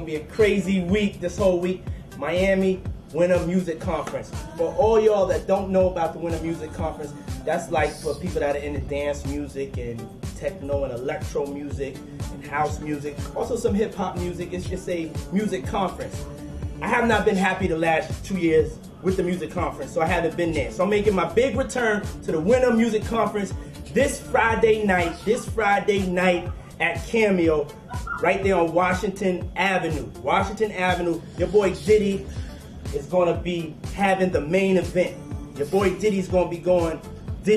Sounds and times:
Speech: 0.0s - 16.2s, 16.8s - 32.3s, 32.9s - 37.5s
Music: 0.0s - 37.5s.

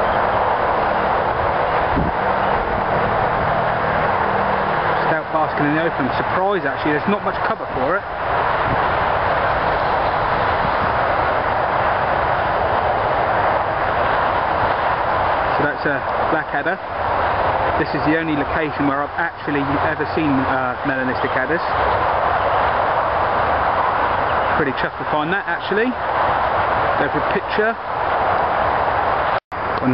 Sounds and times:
Outside, rural or natural: 0.0s - 29.9s
Speech: 5.0s - 8.1s, 15.5s - 16.8s, 17.8s - 21.8s, 24.6s - 26.0s, 27.0s - 27.8s.

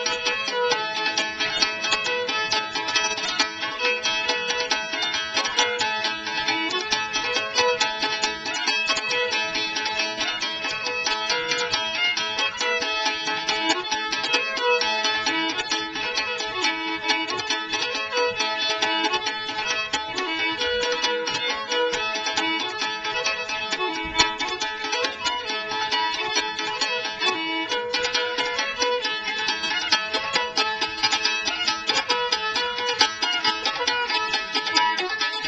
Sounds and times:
Violin, fiddle: 0.0s - 35.4s.

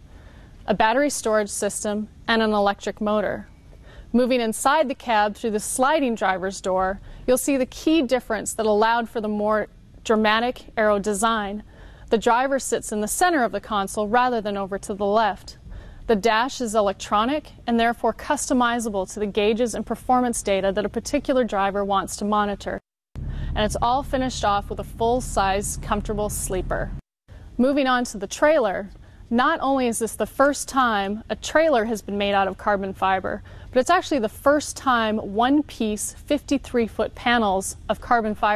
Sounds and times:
Speech: 0.7s - 3.5s, 4.2s - 22.9s, 23.6s - 27.0s, 27.6s - 38.5s.

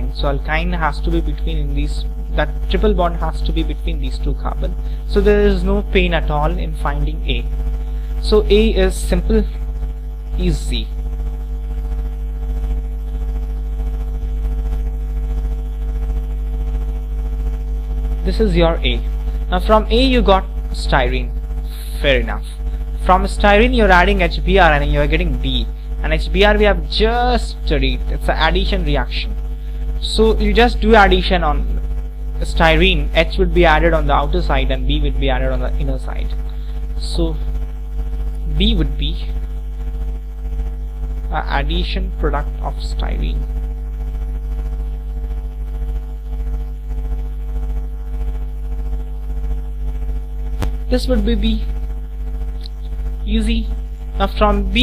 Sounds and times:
Speech: 0.0s - 7.5s, 8.2s - 9.6s, 10.4s - 10.9s, 18.2s - 29.4s, 30.0s - 31.8s, 32.4s - 36.4s, 37.0s - 37.5s, 38.4s - 39.4s, 41.3s - 43.5s, 50.9s - 51.7s, 53.2s - 54.8s.

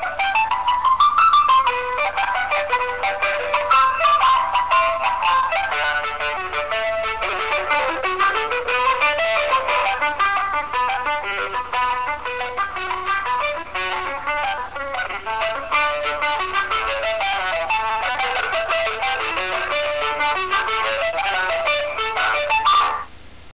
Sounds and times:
Funny music: 0.0s - 23.1s.

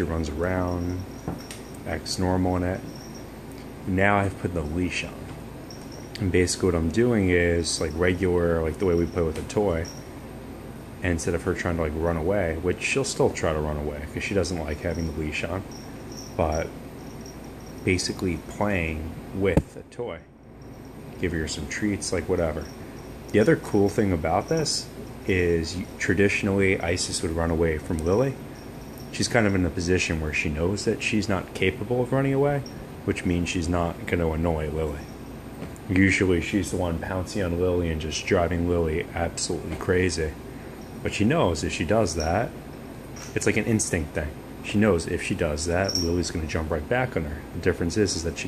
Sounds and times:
Speech: 0.0s - 1.1s, 1.8s - 2.9s, 3.8s - 5.3s, 6.2s - 10.0s, 11.0s - 15.7s, 16.4s - 16.8s, 17.8s - 20.3s, 21.2s - 28.5s, 29.1s - 35.1s, 35.8s - 40.4s, 41.0s - 42.6s, 43.3s - 48.4s.

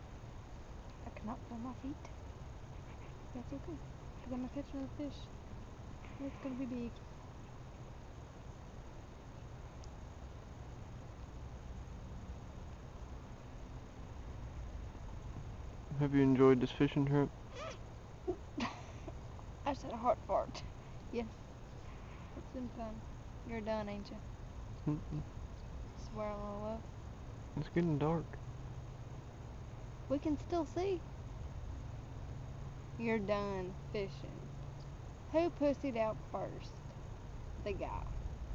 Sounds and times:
Outside, rural or natural: 0.0s - 38.5s
Speech: 1.0s - 2.1s, 3.4s - 5.3s, 6.1s - 7.0s, 15.9s - 17.3s, 19.7s - 21.3s, 22.4s - 24.2s, 26.0s - 26.8s, 27.6s - 28.4s, 30.1s - 31.0s, 33.0s - 34.5s, 35.3s - 36.8s, 37.7s - 38.1s.

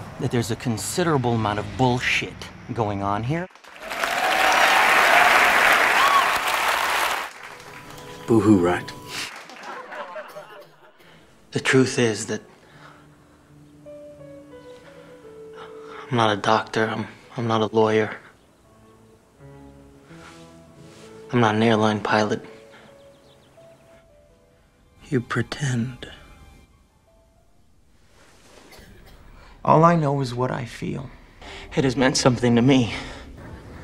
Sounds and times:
Narration, monologue: 0.0s - 3.6s, 10.8s - 26.7s, 28.7s - 33.5s
Male speech, man speaking: 0.2s - 3.5s, 8.3s - 9.0s, 11.5s - 12.4s, 16.1s - 18.2s, 21.3s - 22.5s, 25.0s - 26.2s, 29.6s - 33.1s
Music: 4.5s - 33.8s.

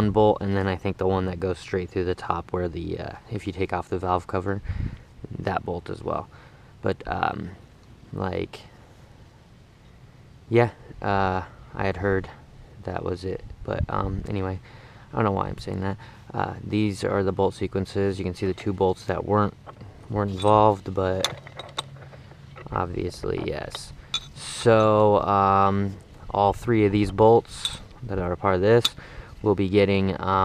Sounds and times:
Speech: 0.0s - 4.6s, 5.2s - 8.8s, 10.5s - 21.3s, 22.7s - 30.4s.

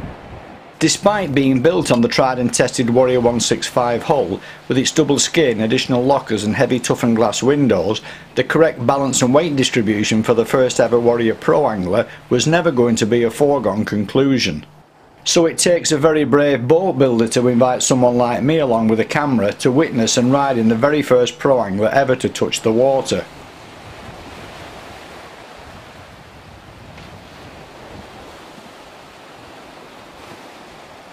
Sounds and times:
Boat, Water vehicle: 0.0s - 31.1s
Speech: 0.8s - 23.3s.

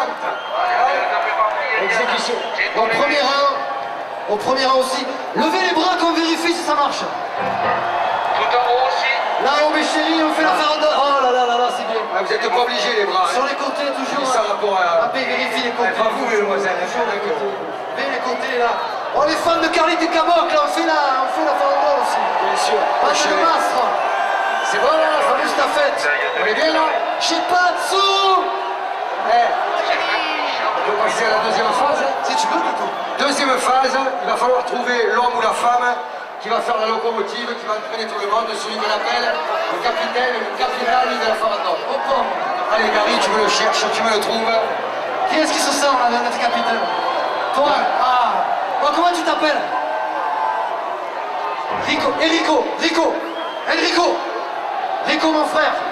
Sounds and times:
Speech: 0.0s - 3.7s, 4.3s - 7.2s, 8.4s - 24.0s, 24.7s - 28.6s, 29.2s - 49.7s, 51.7s - 54.3s, 55.0s - 55.9s.

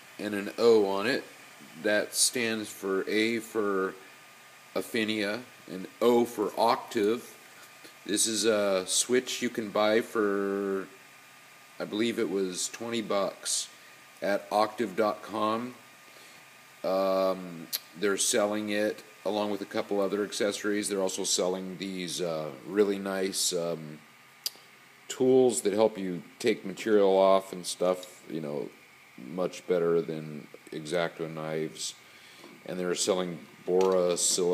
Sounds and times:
Speech: 0.2s - 4.0s, 4.8s - 7.4s, 8.1s - 11.0s, 11.8s - 15.8s, 16.8s - 24.0s, 25.1s - 32.0s, 32.6s - 34.5s.

